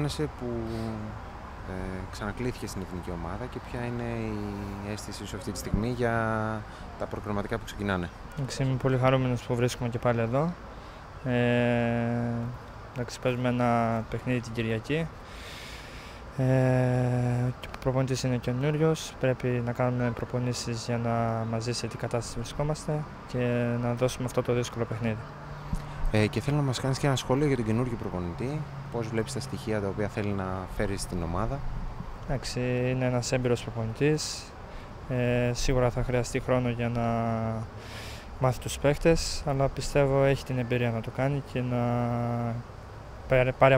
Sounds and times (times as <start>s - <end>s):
Speech: 0.0s - 10.6s, 11.2s - 15.1s, 16.4s - 25.3s, 26.1s - 31.7s, 32.3s - 34.5s, 35.1s - 37.7s, 38.4s - 42.7s, 43.3s - 43.7s.